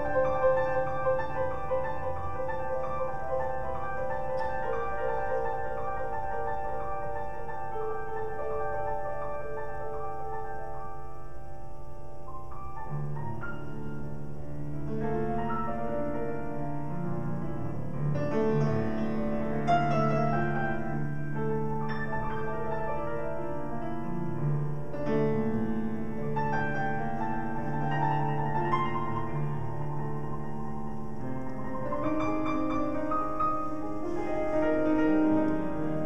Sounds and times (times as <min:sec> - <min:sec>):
Piano: 0:00.0 - 0:36.0.